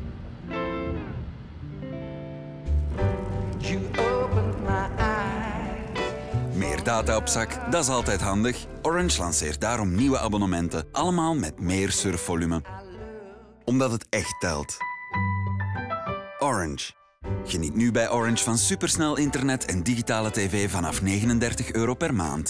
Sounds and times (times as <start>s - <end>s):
Music: 0.0s - 22.4s
Speech: 6.6s - 13.0s, 13.7s - 14.8s, 16.4s - 22.4s.